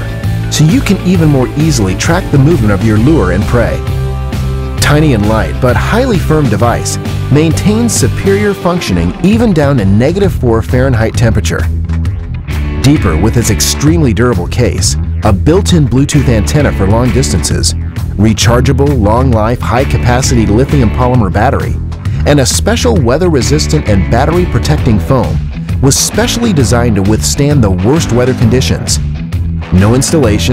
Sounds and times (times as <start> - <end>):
Music: 0.0 - 30.5
Speech: 0.6 - 3.8, 4.8 - 11.7, 12.8 - 29.0, 29.7 - 30.5.